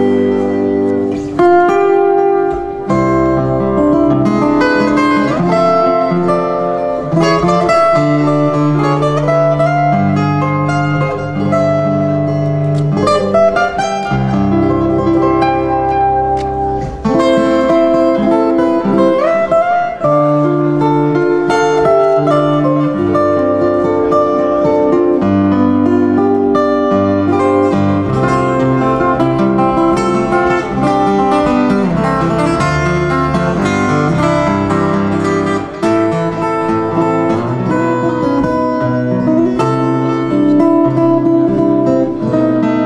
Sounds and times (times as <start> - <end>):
Acoustic guitar: 0.0 - 42.8.